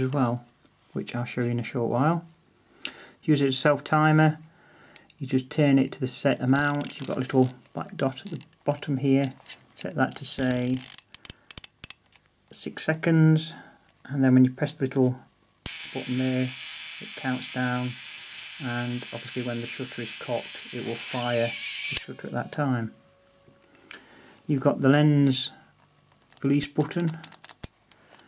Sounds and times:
Speech: 0.0 - 2.3, 3.2 - 4.4, 5.2 - 10.8, 12.5 - 15.3, 15.9 - 18.0, 18.6 - 23.0, 24.5 - 25.6, 26.4 - 27.3
Electric shaver, electric razor: 15.7 - 22.1.

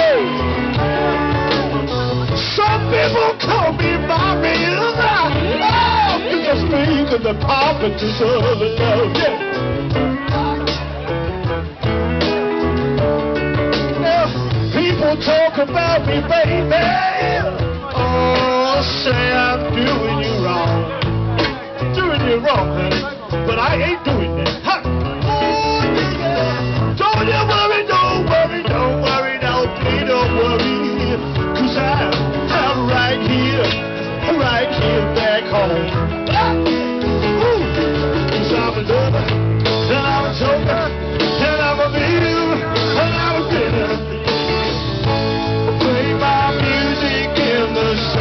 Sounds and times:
Music: 0.0 - 48.2
Male singing: 2.4 - 9.5, 14.0 - 21.0, 21.8 - 36.8, 37.4 - 44.2, 45.7 - 48.2.

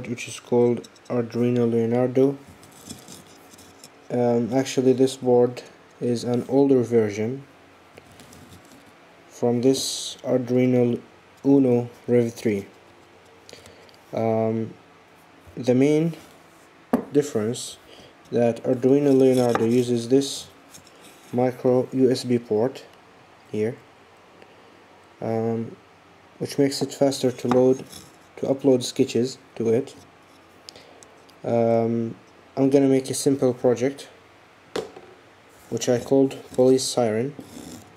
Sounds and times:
Speech: 0.0 - 2.4, 4.1 - 7.5, 9.3 - 12.7, 14.1 - 14.8, 15.6 - 16.3, 17.1 - 20.6, 21.4 - 22.9, 23.5 - 23.8, 25.2 - 25.8, 26.4 - 30.0, 31.4 - 34.2, 35.7 - 37.4.

